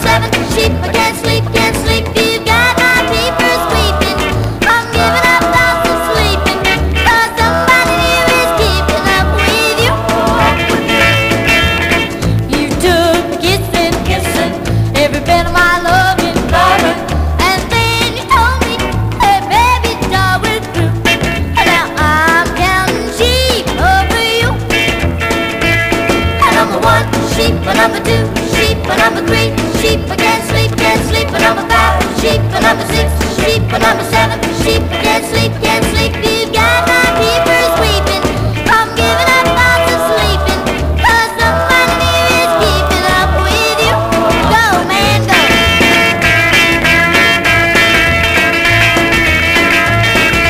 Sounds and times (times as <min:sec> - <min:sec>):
Music: 0:00.0 - 0:50.5.